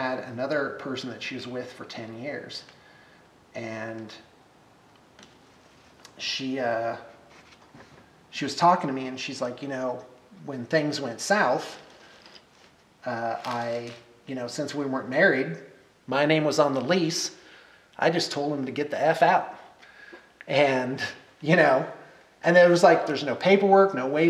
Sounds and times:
Speech: 0.0s - 2.7s, 3.6s - 4.3s, 6.1s - 7.1s, 8.3s - 11.9s, 13.0s - 17.4s, 18.0s - 19.6s, 20.5s - 24.3s
Inside, small room: 0.0s - 24.3s.

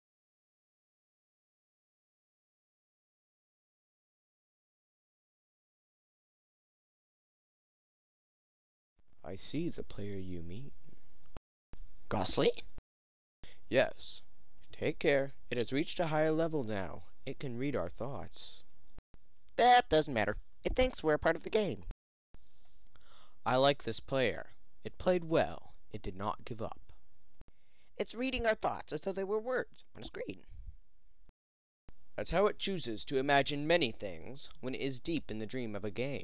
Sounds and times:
Narration, monologue: 9.1s - 12.8s, 13.4s - 31.3s, 31.9s - 36.2s.

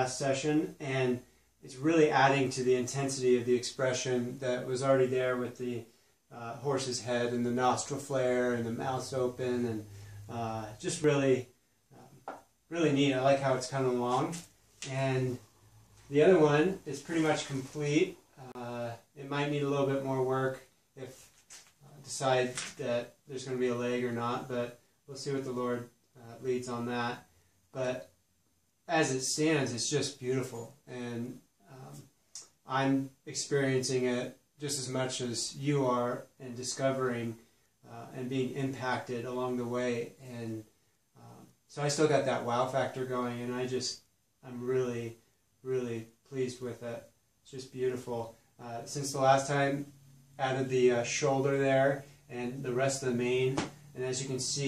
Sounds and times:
Speech: 0.0s - 15.5s, 16.1s - 28.1s, 28.9s - 54.6s.

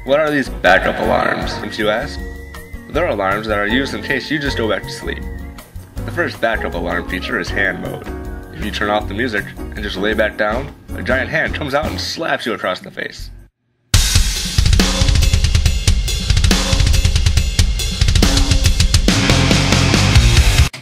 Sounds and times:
Speech: 0.0s - 2.2s, 2.9s - 5.2s, 6.1s - 13.4s
Music: 0.0s - 20.8s.

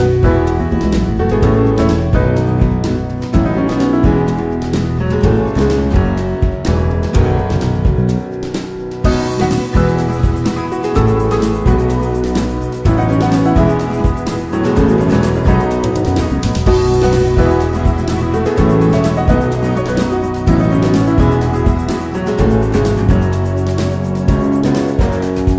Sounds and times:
Music: 0.0s - 25.5s.

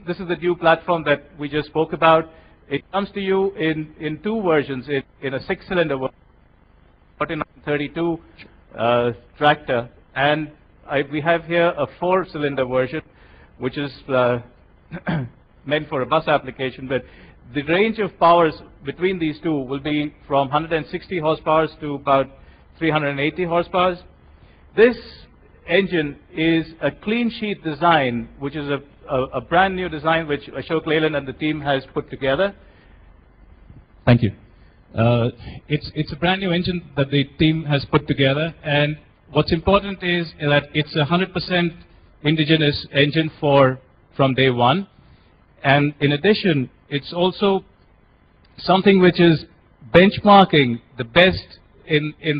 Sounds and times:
Speech: 0.0s - 6.1s, 7.2s - 24.1s, 24.8s - 32.6s, 34.0s - 44.9s, 45.6s - 47.7s, 48.6s - 52.3s.

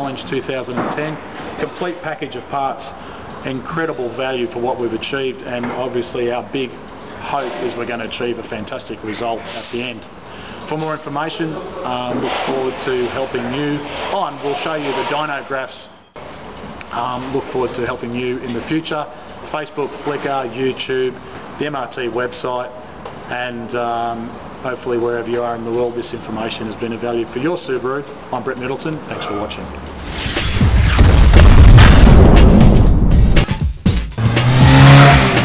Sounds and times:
Speech: 0.0s - 10.1s, 10.7s - 16.0s, 16.9s - 29.8s
Music: 30.0s - 35.4s
Car: 34.2s - 35.4s.

